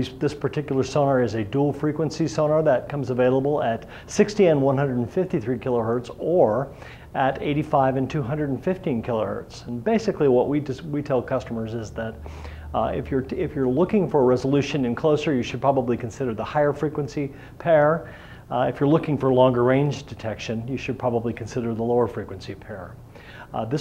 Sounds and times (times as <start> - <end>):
Speech: 0.0 - 23.8.